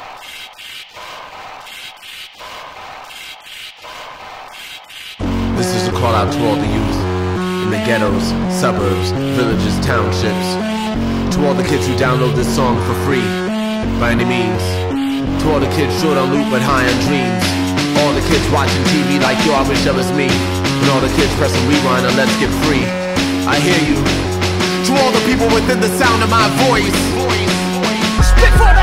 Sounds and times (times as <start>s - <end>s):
Sampler: 5.2s - 28.8s
Speech: 5.6s - 10.6s, 11.3s - 27.6s.